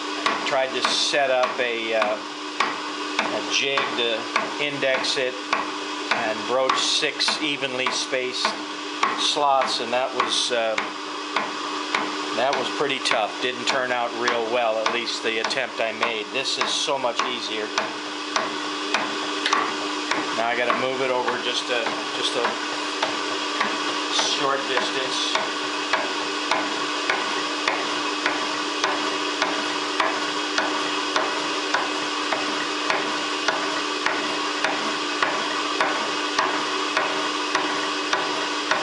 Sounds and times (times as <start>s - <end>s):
Speech: 0.5s - 2.2s, 3.3s - 5.4s, 6.2s - 8.6s, 9.2s - 10.9s, 12.4s - 17.8s, 20.4s - 22.6s, 24.1s - 25.4s.